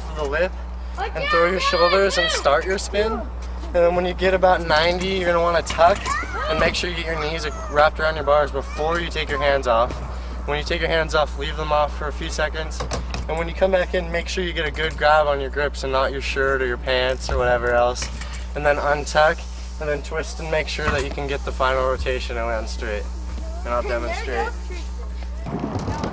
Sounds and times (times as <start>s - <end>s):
Vehicle: 0.0s - 26.1s
Speech: 10.6s - 23.0s.